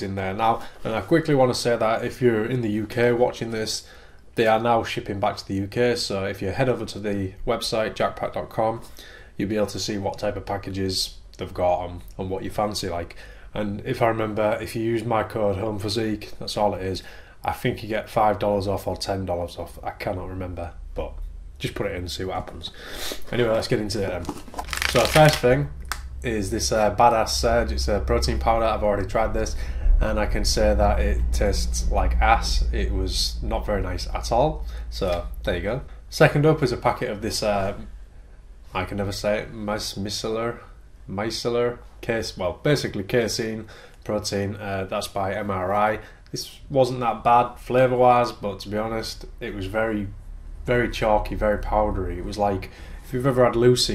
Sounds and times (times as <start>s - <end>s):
Speech: 0.0s - 37.9s, 38.7s - 53.9s.